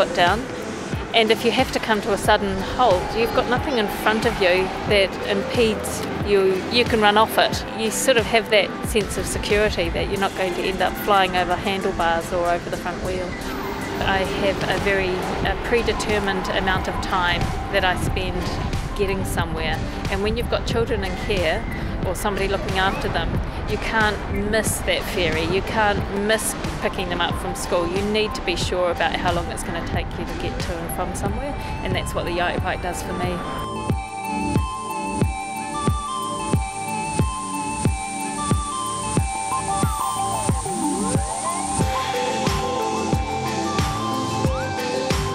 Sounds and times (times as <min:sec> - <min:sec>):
Speech: 0:00.0 - 0:00.4, 0:01.2 - 0:13.4, 0:14.0 - 0:33.7
Music: 0:00.0 - 0:45.3.